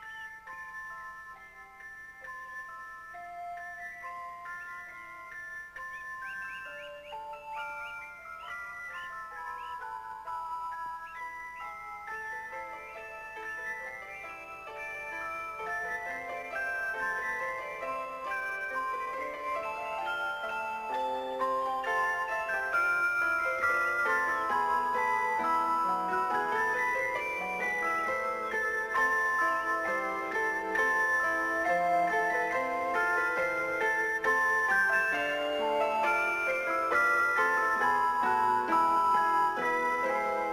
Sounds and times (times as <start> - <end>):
Background music: 0.0 - 40.5.